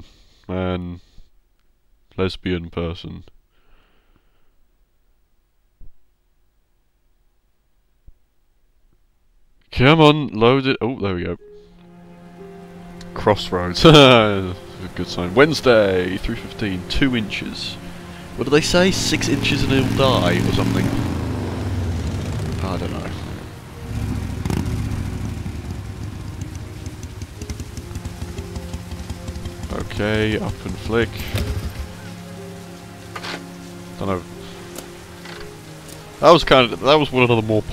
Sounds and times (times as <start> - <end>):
Rain on surface: 12.2 - 13.2, 13.8 - 37.7
Raindrop: 13.8 - 37.7.